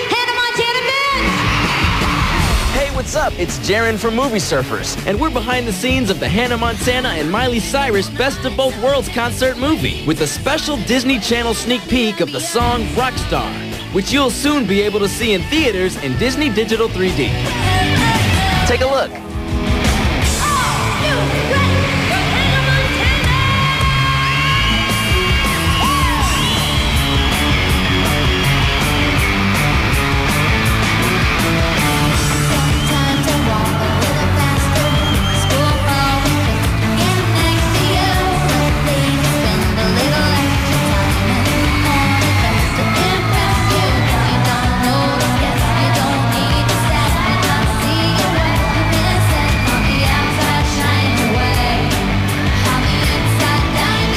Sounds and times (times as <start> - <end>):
Pop music: 0.0 - 54.1.